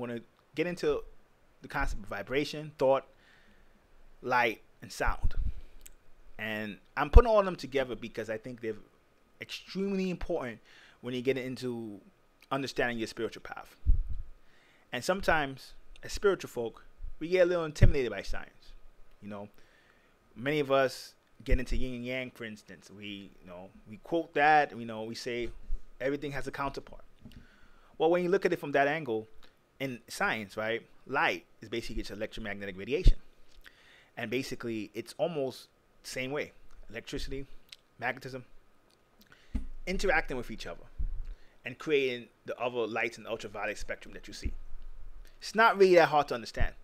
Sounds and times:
Speech: 0:00.0 - 0:03.1, 0:04.2 - 0:05.4, 0:06.4 - 0:13.8, 0:14.9 - 0:19.5, 0:20.4 - 0:27.1, 0:28.0 - 0:33.2, 0:34.2 - 0:38.5, 0:39.9 - 0:40.9, 0:41.6 - 0:44.6, 0:45.4 - 0:46.8.

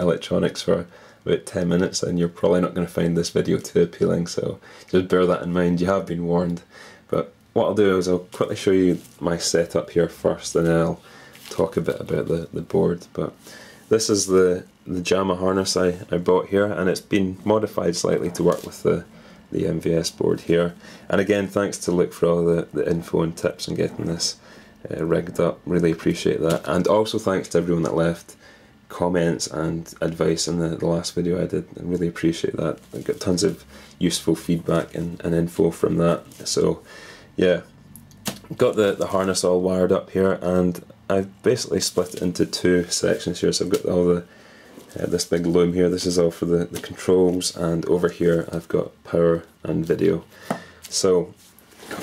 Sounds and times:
Speech: 0:00.0 - 0:37.7, 0:38.4 - 0:44.3, 0:44.9 - 0:50.3, 0:50.9 - 0:51.4.

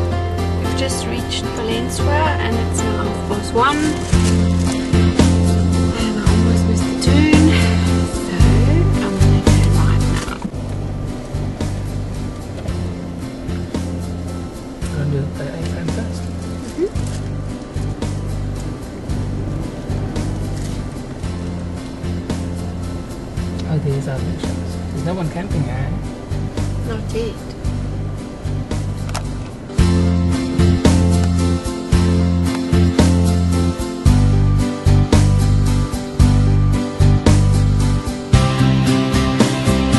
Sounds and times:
Music: 0:00.0 - 0:39.9
Speech: 0:23.7 - 0:26.0.

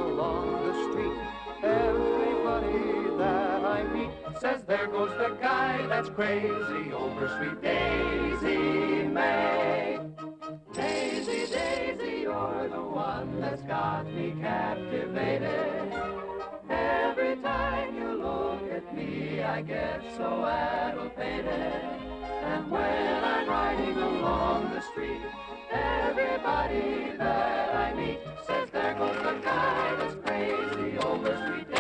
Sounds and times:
Music: 0:00.0 - 0:31.8.

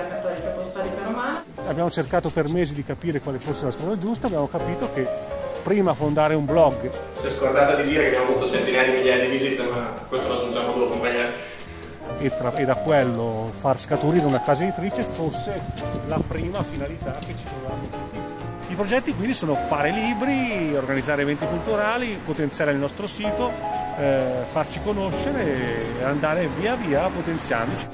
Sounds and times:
Music: 0:00.0 - 0:27.9
Speech: 0:05.7 - 0:11.4.

